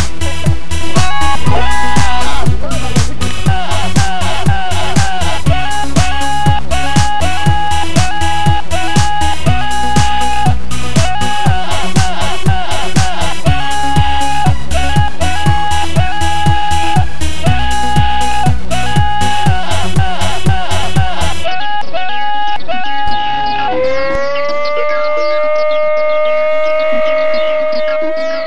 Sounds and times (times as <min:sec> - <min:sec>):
Music: 0:00.0 - 0:28.4.